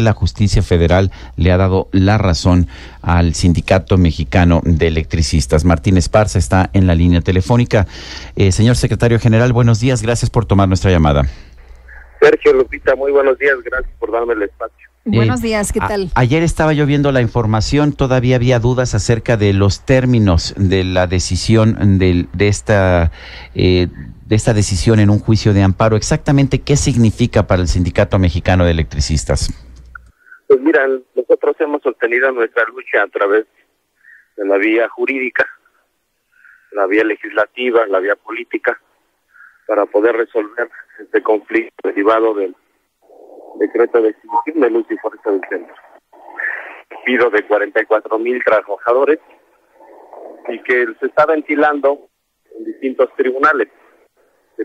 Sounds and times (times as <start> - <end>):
Speech: 0.0 - 11.3, 11.9 - 29.6, 30.3 - 33.5, 34.4 - 35.6, 36.7 - 38.8, 39.6 - 42.6, 43.4 - 49.4, 50.4 - 53.7
Radio: 11.8 - 16.2, 30.2 - 35.7, 36.4 - 42.6, 43.3 - 49.5, 50.1 - 54.6.